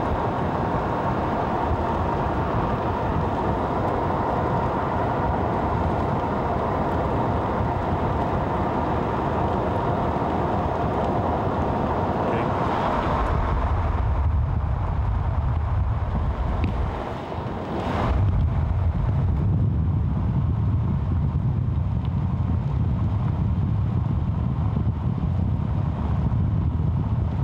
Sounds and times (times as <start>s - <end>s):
Speech: 12.2s - 12.5s.